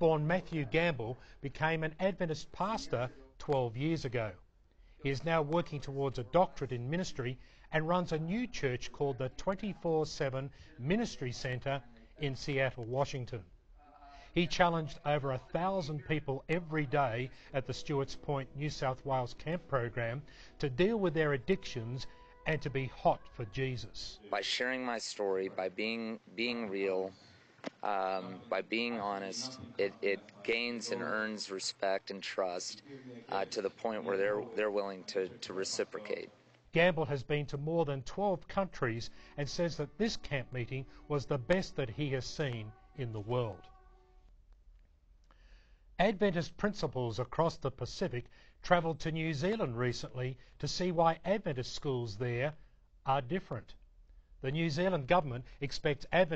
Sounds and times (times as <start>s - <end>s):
Speech: 0.0s - 4.4s, 5.0s - 27.2s, 27.8s - 43.7s, 46.0s - 53.8s, 54.4s - 56.3s.